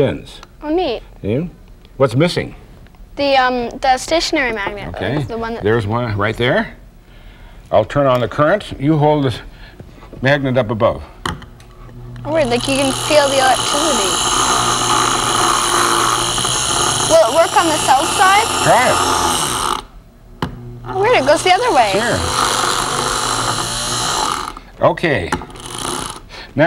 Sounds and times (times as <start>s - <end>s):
Drill: 12.2s - 19.9s, 20.8s - 24.7s, 25.4s - 26.3s.